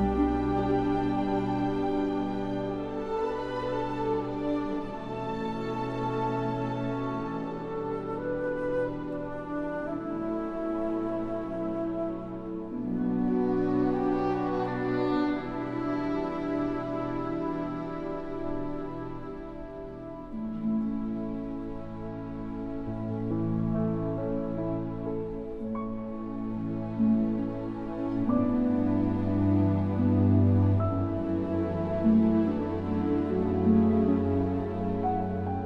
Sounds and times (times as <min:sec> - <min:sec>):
Music: 0:00.0 - 0:35.6.